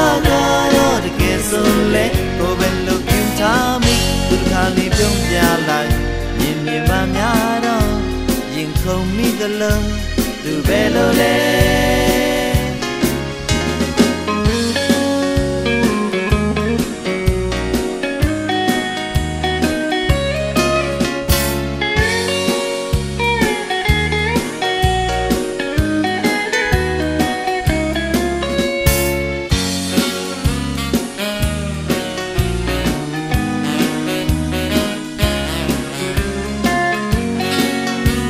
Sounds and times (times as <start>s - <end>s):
Steel guitar, slide guitar: 0.0s - 38.3s.